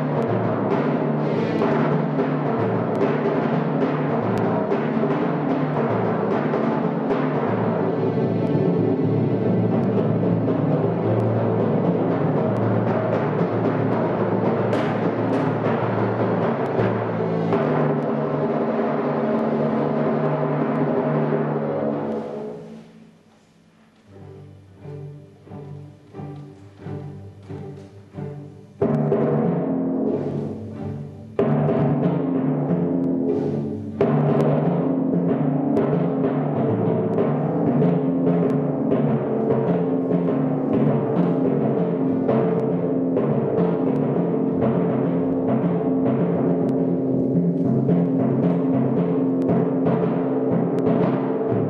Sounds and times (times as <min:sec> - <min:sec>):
Timpani: 0:00.0 - 0:51.6.